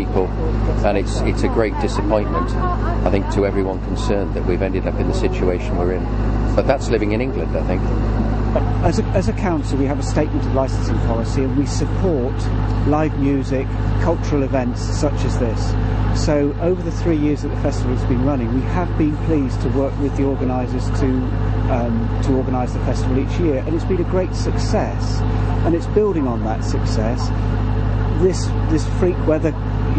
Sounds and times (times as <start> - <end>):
Speech: 0.0 - 6.0, 6.6 - 7.9, 8.5 - 27.3, 28.2 - 29.9
Outside, urban or manmade: 0.0 - 29.9
Vehicle: 0.0 - 29.9.